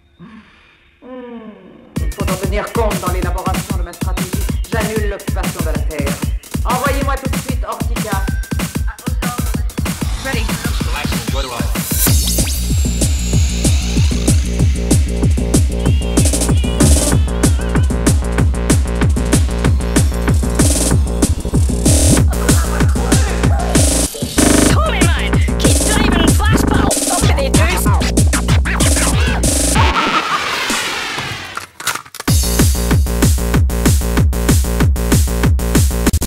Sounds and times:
Music: 1.9s - 31.5s, 32.3s - 36.2s.

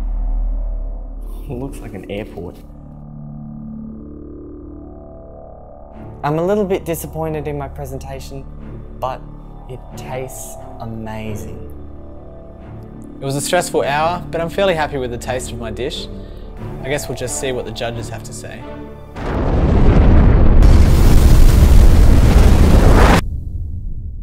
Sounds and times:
Music: 0.0s - 21.1s
Speech: 1.4s - 2.6s, 6.2s - 8.4s, 9.0s - 11.6s, 13.2s - 16.1s, 16.8s - 18.6s
Eruption: 19.2s - 24.2s.

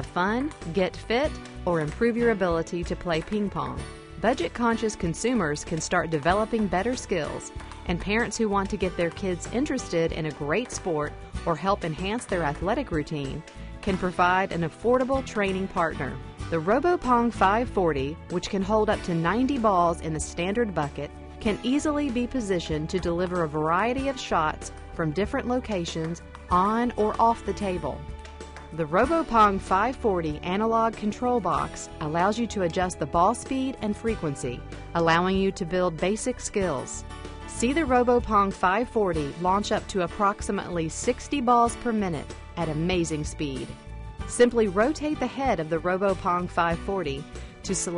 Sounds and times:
Speech: 0.0s - 28.0s, 28.8s - 47.9s
Music: 0.0s - 47.9s.

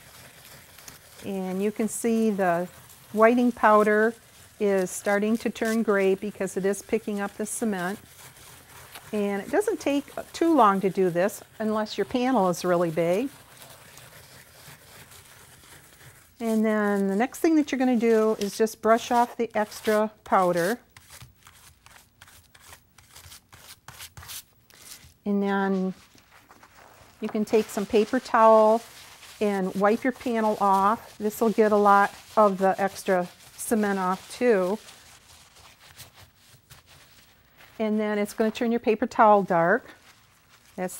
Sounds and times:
Speech: 1.2s - 8.0s, 9.1s - 13.3s, 16.4s - 20.8s, 25.3s - 26.0s, 27.2s - 34.8s, 37.8s - 40.0s.

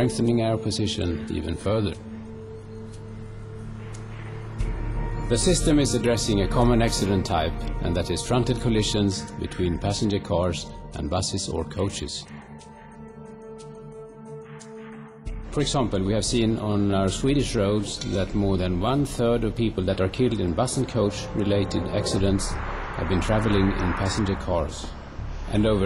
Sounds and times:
Speech: 0.0s - 2.0s, 5.3s - 12.4s, 15.5s - 24.9s, 25.5s - 25.8s
Music: 0.0s - 25.8s
Vehicle: 20.8s - 25.8s.

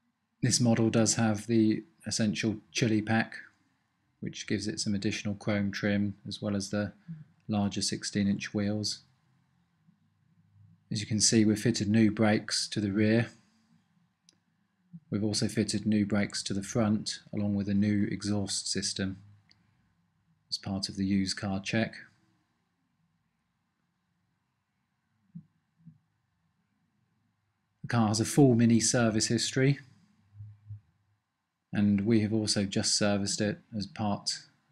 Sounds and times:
Speech: 0.4s - 3.6s, 4.2s - 9.0s, 10.9s - 13.4s, 15.1s - 19.2s, 20.5s - 22.1s, 27.8s - 29.9s, 31.8s - 34.5s.

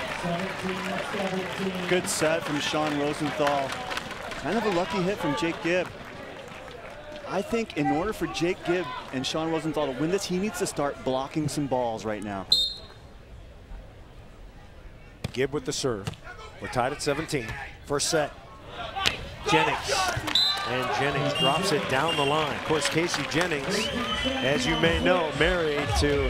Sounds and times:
Speech: 0.2s - 3.7s, 4.4s - 5.9s, 7.2s - 12.5s, 15.4s - 26.2s.

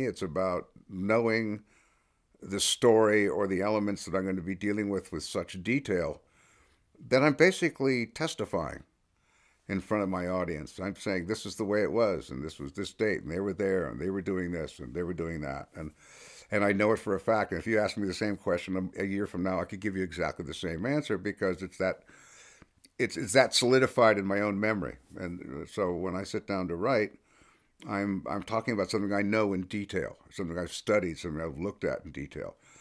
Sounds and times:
Speech: 0.0s - 1.7s, 2.4s - 6.2s, 7.0s - 8.9s, 9.7s - 22.1s, 22.9s - 27.2s, 27.8s - 32.6s.

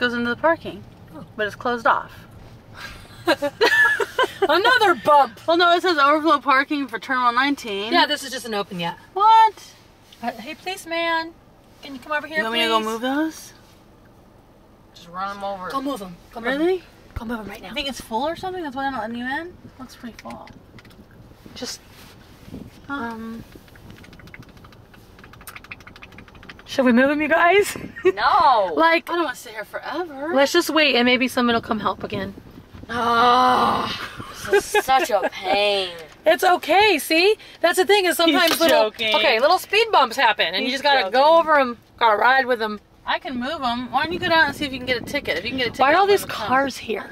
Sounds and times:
Outside, rural or natural: 0.0s - 47.1s.

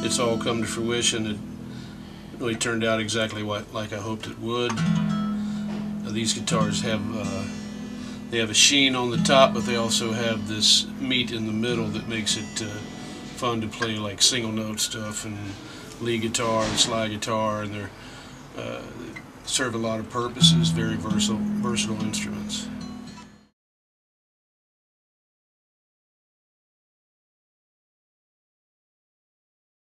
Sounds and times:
Speech: 0.0s - 1.4s, 2.4s - 4.8s, 6.0s - 7.6s, 8.3s - 18.0s, 18.6s - 22.8s
Guitar: 0.0s - 23.6s.

